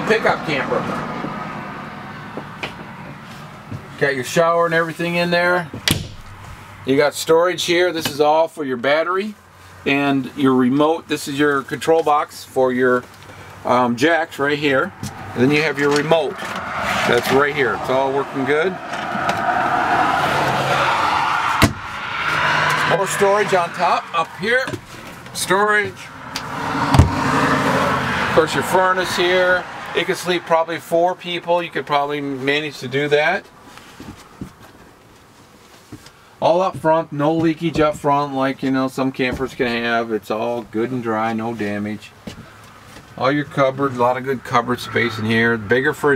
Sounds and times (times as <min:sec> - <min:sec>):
Speech: 0:00.0 - 0:00.9, 0:04.0 - 0:05.7, 0:06.9 - 0:16.4, 0:17.0 - 0:18.8, 0:22.9 - 0:24.8, 0:25.4 - 0:26.1, 0:28.4 - 0:33.5, 0:36.4 - 0:42.2, 0:43.2 - 0:46.1
Car: 0:00.0 - 0:46.1.